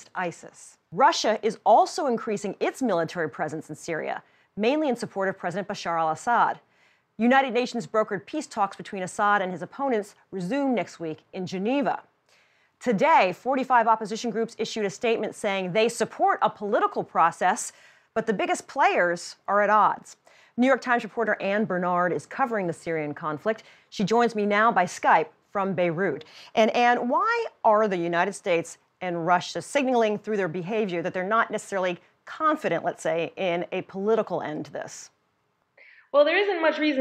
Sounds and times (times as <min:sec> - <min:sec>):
Speech: 0:12.8 - 0:35.1, 0:36.2 - 0:37.0.